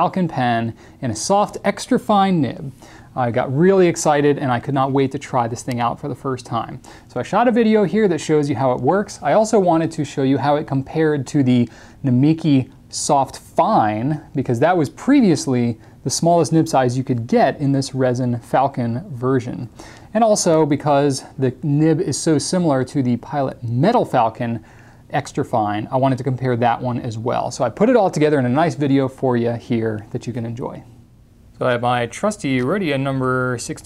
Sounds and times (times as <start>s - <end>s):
Speech: 0.0s - 31.0s, 31.6s - 33.8s.